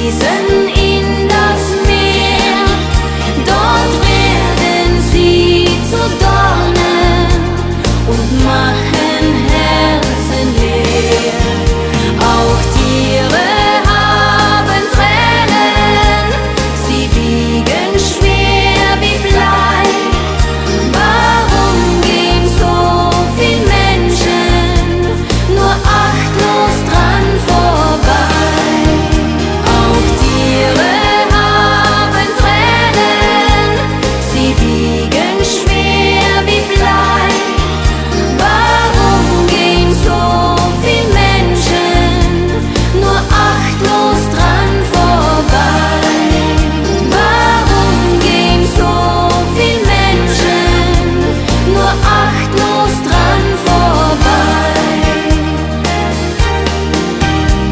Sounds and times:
Christian music: 0.0s - 57.7s.

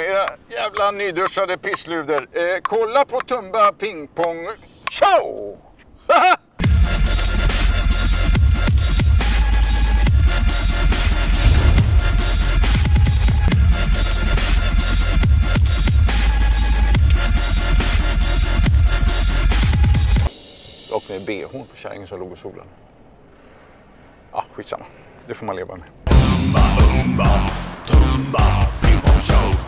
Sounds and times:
Speech: 0.0s - 5.6s, 20.9s - 22.7s, 24.3s - 25.9s
Music: 6.6s - 21.5s, 26.1s - 29.6s.

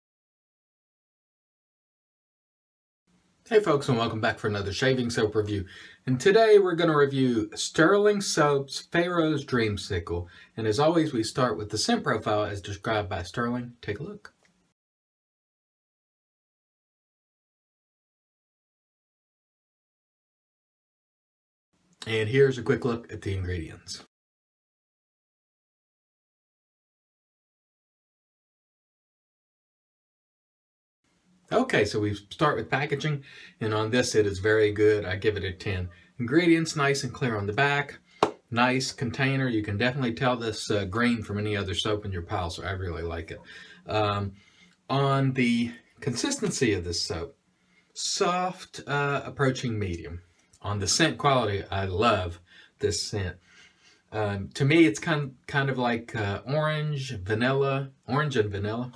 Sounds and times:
Speech: 3.5s - 14.3s, 22.0s - 24.1s, 31.5s - 47.3s, 48.0s - 53.4s, 54.1s - 58.9s.

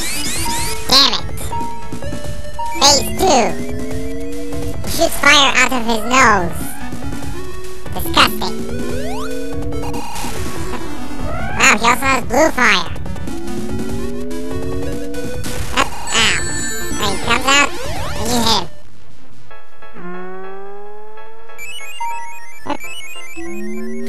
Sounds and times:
Music: 0.0s - 24.0s
Speech: 0.9s - 1.5s, 2.8s - 3.6s, 4.9s - 6.8s, 8.0s - 8.6s, 11.6s - 13.0s, 15.8s - 18.7s.

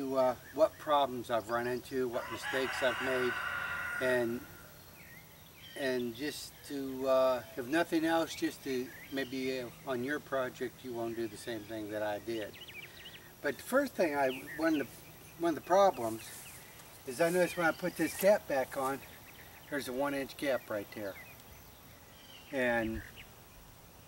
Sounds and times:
Speech: 0.0s - 3.3s, 5.8s - 12.6s, 13.4s - 16.4s, 17.1s - 19.0s, 19.7s - 21.2s, 22.5s - 23.0s.

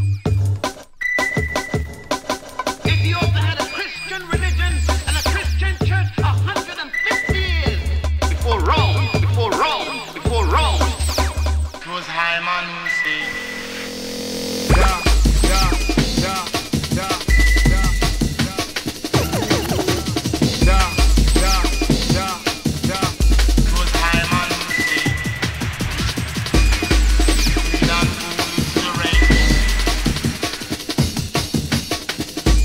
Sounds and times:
Music: 0.0s - 32.6s.

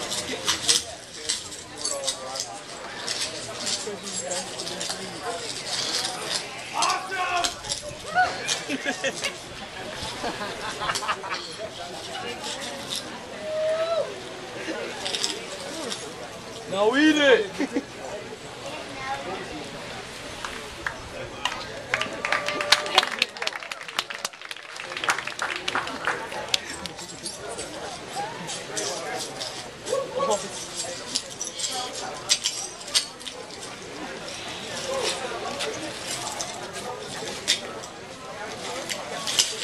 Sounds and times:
Speech: 11.3s - 39.6s.

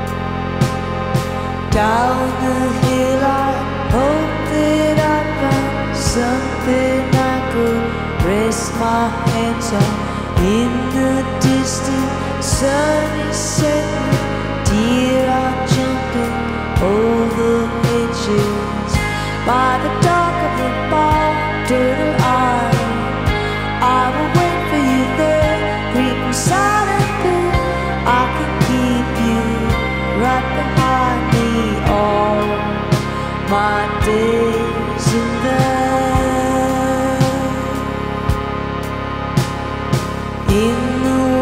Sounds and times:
Music: 0.0s - 41.4s.

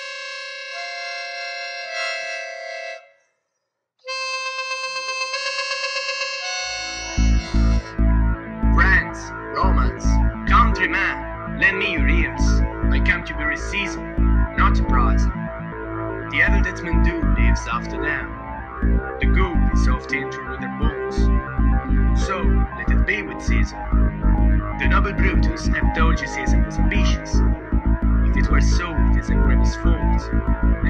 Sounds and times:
Music: 0.0s - 3.2s, 4.1s - 30.9s
Speech synthesizer: 7.2s - 7.9s, 8.7s - 15.3s, 16.3s - 18.4s, 19.2s - 21.4s, 22.2s - 23.8s, 24.8s - 27.4s, 28.3s - 30.9s
Narration, monologue: 7.6s - 15.4s, 16.3s - 30.9s.

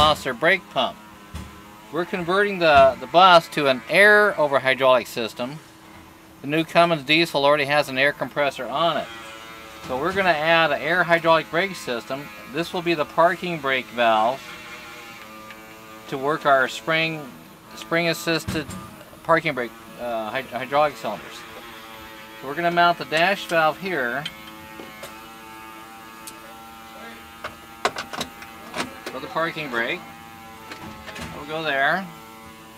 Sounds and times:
Speech: 0.0s - 1.0s, 1.9s - 5.6s, 6.4s - 9.1s, 9.9s - 14.4s, 16.1s - 21.6s, 22.4s - 24.3s, 26.3s - 27.3s, 28.7s - 30.1s, 31.2s - 32.2s.

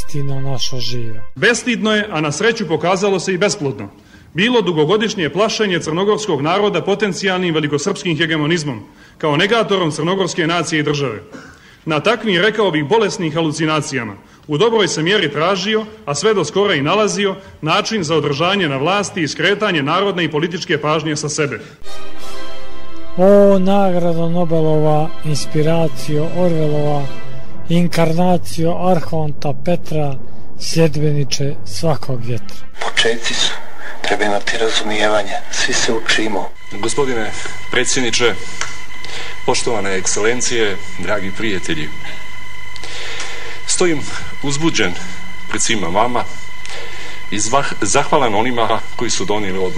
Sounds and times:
Speech: 0.0s - 21.6s, 23.2s - 38.6s, 39.4s - 42.1s, 43.7s - 46.4s, 47.3s - 49.7s.

